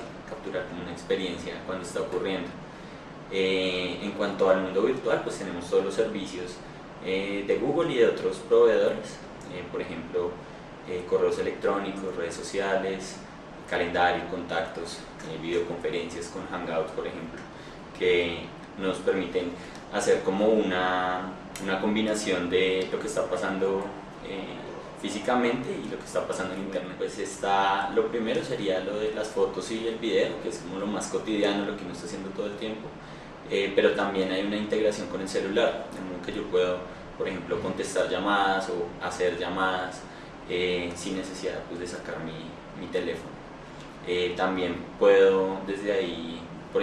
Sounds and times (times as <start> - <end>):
Speech: 0.0 - 2.6, 3.3 - 43.4, 44.0 - 46.8.